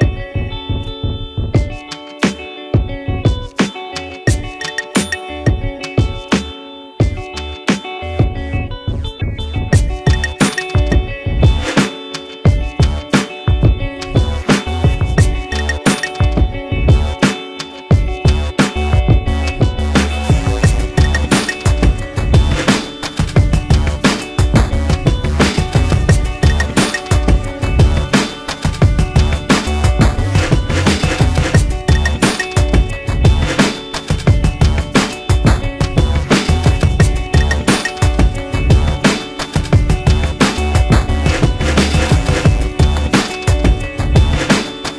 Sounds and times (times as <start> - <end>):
Music: 0.0 - 44.9.